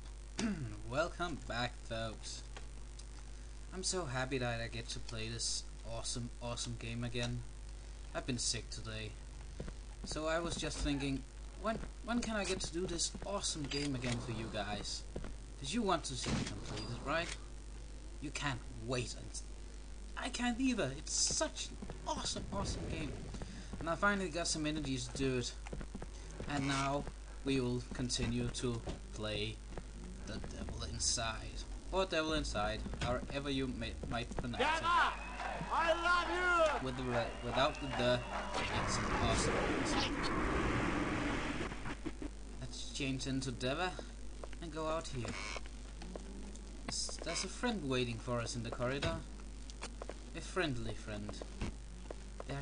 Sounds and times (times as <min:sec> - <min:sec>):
Speech: 0:00.4 - 0:02.5, 0:03.7 - 0:07.5, 0:08.2 - 0:09.2, 0:10.1 - 0:17.4, 0:18.2 - 0:19.5, 0:20.2 - 0:23.2, 0:23.8 - 0:25.6, 0:26.4 - 0:29.6, 0:30.2 - 0:40.2, 0:42.6 - 0:45.4, 0:46.9 - 0:49.3, 0:50.4 - 0:51.5.